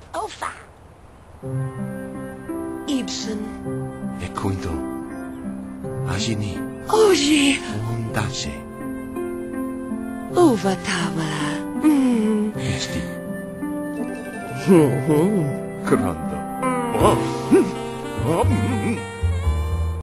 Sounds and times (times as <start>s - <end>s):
Music: 1.4s - 20.0s
Speech: 17.0s - 19.0s.